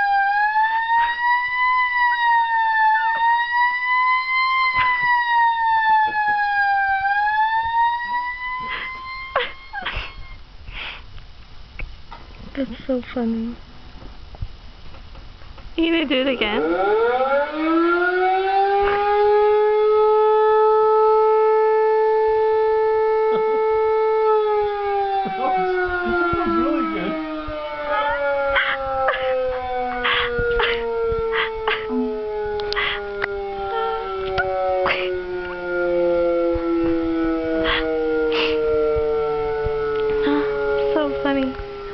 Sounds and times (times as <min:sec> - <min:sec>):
Siren: 0:00.0 - 0:10.5, 0:15.8 - 0:41.9.